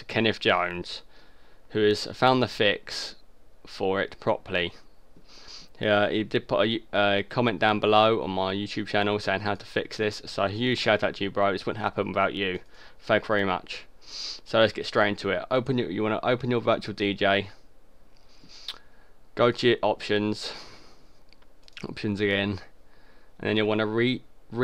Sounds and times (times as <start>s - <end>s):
Speech: 0.0s - 1.1s, 1.7s - 4.8s, 5.8s - 13.9s, 14.5s - 17.6s, 19.4s - 20.7s, 21.8s - 22.7s, 23.4s - 24.6s.